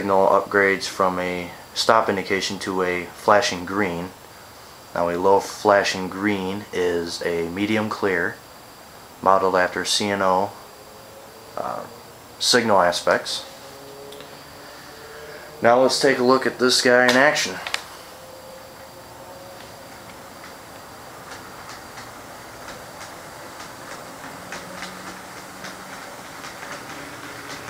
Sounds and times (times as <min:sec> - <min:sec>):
Clickety-clack: 0:21.2 - 0:27.7.